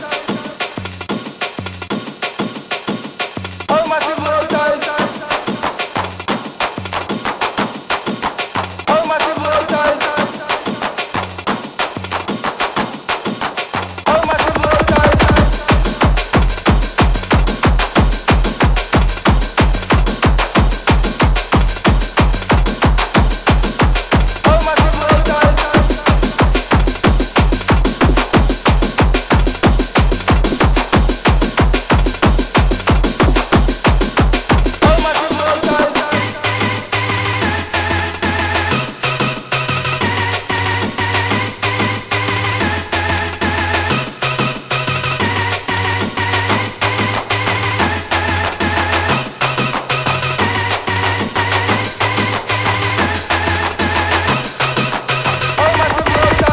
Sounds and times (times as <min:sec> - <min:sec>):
Music: 0:00.0 - 0:56.5.